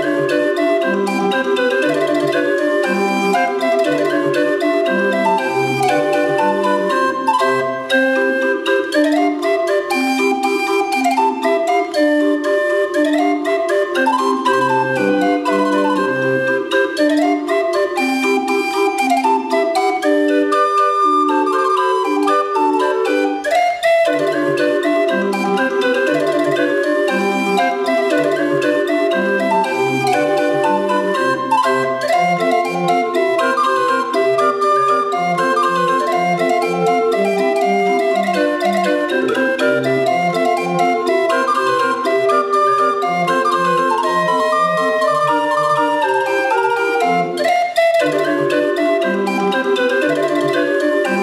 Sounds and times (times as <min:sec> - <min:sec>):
Hammond organ: 0:00.0 - 0:51.2.